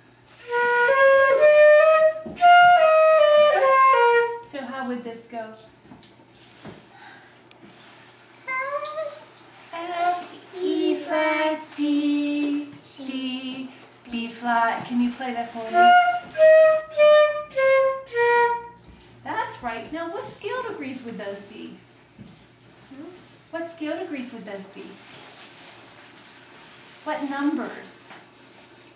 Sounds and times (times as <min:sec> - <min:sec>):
Flute: 0:00.4 - 0:04.5, 0:15.7 - 0:18.8.